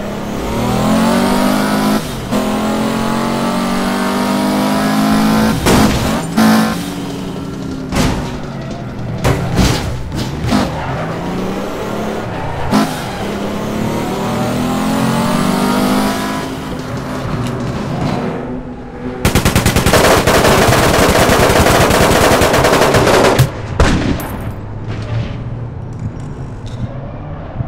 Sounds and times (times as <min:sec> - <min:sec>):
Car: 0:00.0 - 0:27.6.